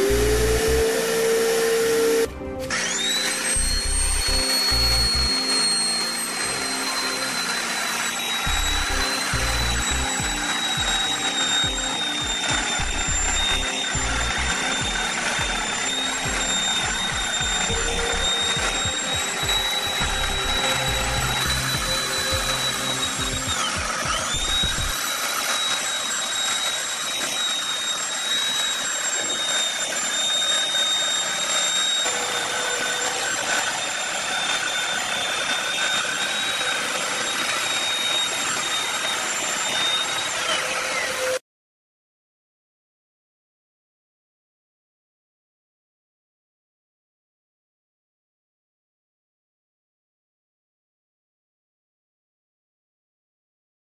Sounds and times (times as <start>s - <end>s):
Music: 0.0s - 25.1s
Tools: 2.6s - 41.4s.